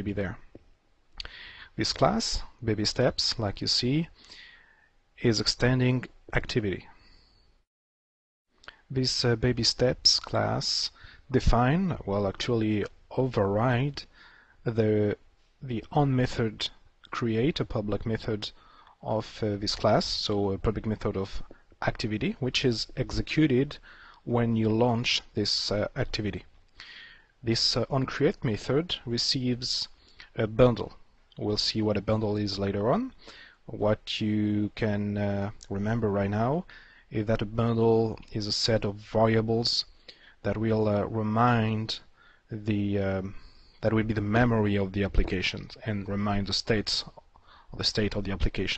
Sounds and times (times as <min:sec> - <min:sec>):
Speech: 0:00.0 - 0:00.6, 0:01.7 - 0:04.2, 0:05.2 - 0:07.0, 0:08.9 - 0:26.5, 0:27.4 - 0:48.7.